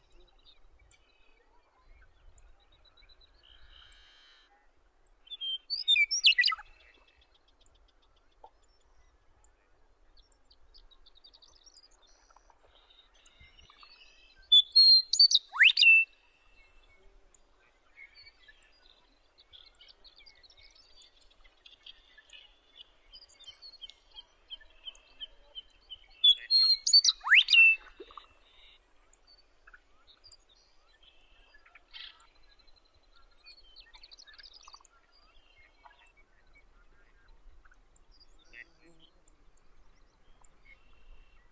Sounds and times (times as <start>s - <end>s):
Bird: 0.0s - 41.5s
Outside, rural or natural: 0.0s - 41.5s.